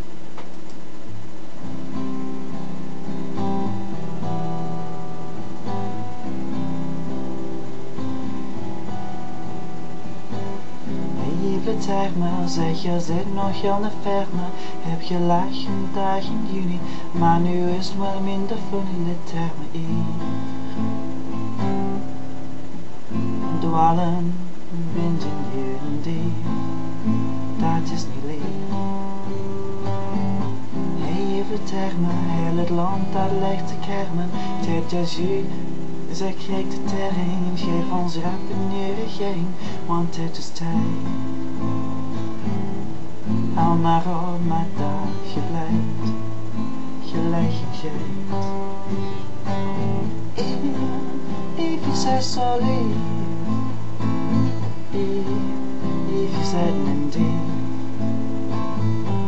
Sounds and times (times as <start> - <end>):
Music: 1.1 - 59.2.